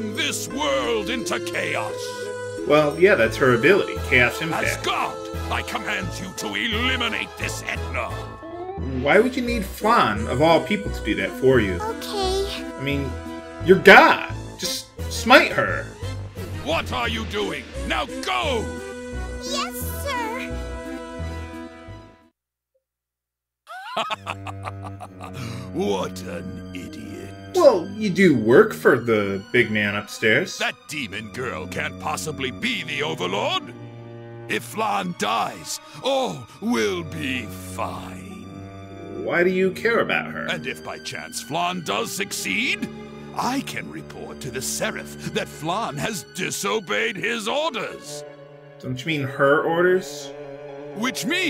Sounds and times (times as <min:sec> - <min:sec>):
Speech: 0:00.0 - 0:02.1, 0:02.7 - 0:08.2, 0:09.0 - 0:15.9, 0:16.6 - 0:18.7, 0:19.4 - 0:20.5, 0:25.7 - 0:33.7, 0:34.5 - 0:38.4, 0:39.1 - 0:48.2, 0:48.8 - 0:50.3, 0:51.0 - 0:51.4
Music: 0:00.0 - 0:22.3, 0:24.2 - 0:51.4.